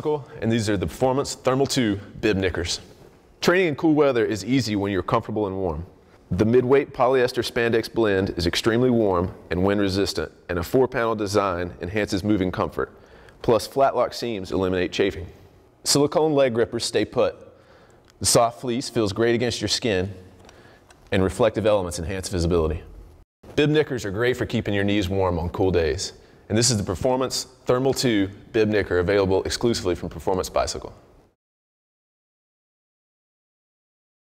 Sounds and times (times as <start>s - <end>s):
Speech: 0.0s - 17.5s, 18.2s - 20.2s, 21.1s - 22.9s, 23.5s - 31.0s.